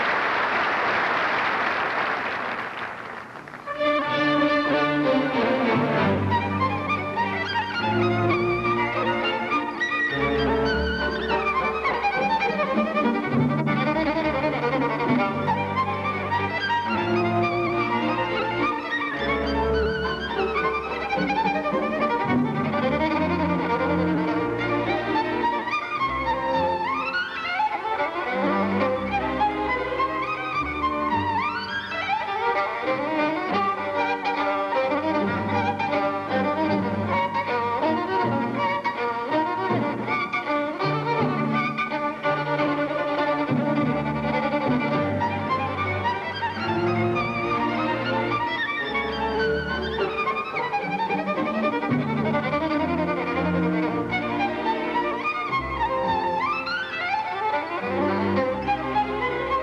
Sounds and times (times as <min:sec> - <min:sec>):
Violin, fiddle: 0:03.1 - 0:59.6.